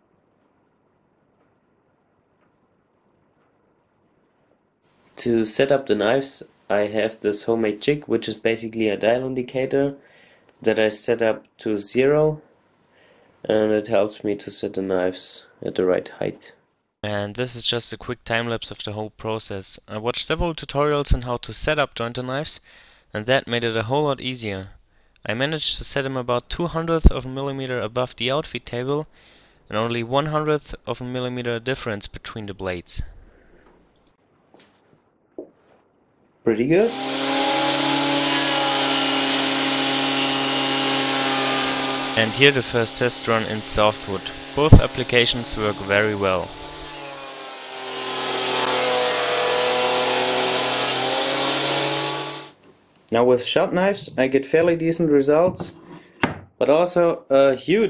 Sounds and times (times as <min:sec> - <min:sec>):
Speech: 0:05.2 - 0:10.0, 0:10.6 - 0:12.4, 0:13.4 - 0:22.6, 0:23.2 - 0:29.1, 0:29.7 - 0:33.1, 0:36.5 - 0:36.9, 0:42.2 - 0:46.5, 0:53.1 - 0:55.8, 0:56.6 - 0:57.9
Drill: 0:36.8 - 0:52.6.